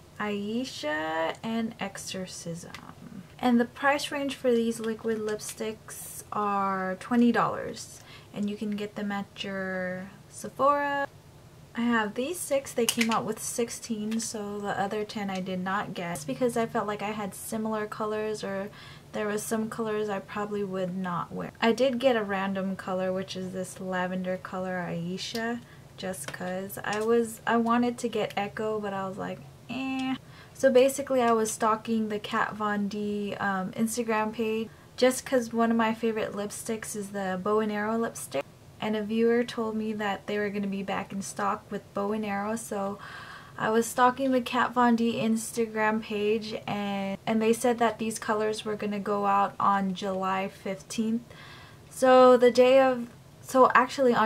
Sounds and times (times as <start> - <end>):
Speech: 0.2 - 11.1, 11.8 - 43.0, 43.6 - 51.3, 51.9 - 54.2.